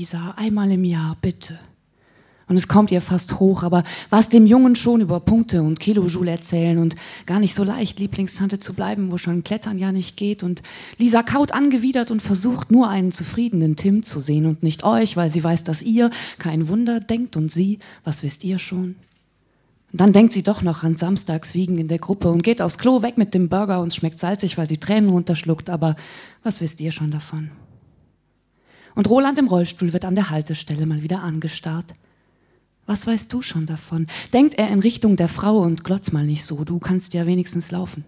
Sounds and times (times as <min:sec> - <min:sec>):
Speech: 0:00.0 - 0:01.7, 0:02.5 - 0:19.0, 0:20.0 - 0:27.6, 0:29.0 - 0:32.0, 0:32.9 - 0:38.0.